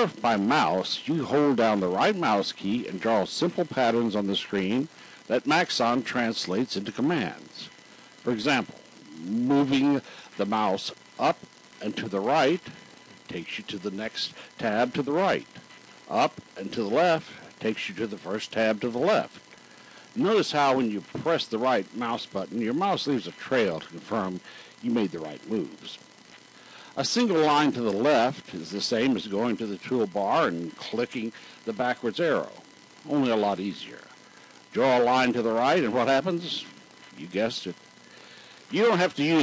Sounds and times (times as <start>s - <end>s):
Speech: 0.0s - 19.4s, 20.2s - 26.0s, 27.0s - 37.8s, 38.7s - 39.4s.